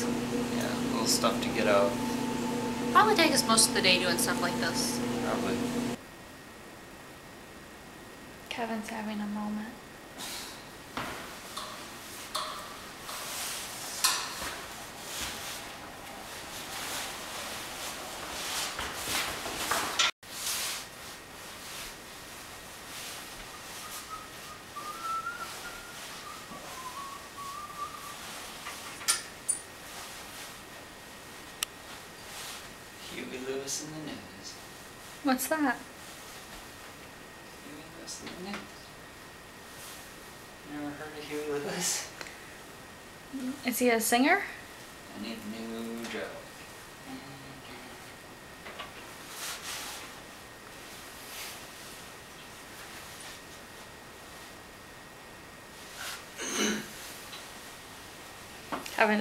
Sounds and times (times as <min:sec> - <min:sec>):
Speech: 0:00.5 - 0:02.0, 0:02.9 - 0:05.7, 0:08.5 - 0:09.8, 0:35.3 - 0:35.9, 0:58.9 - 0:59.2.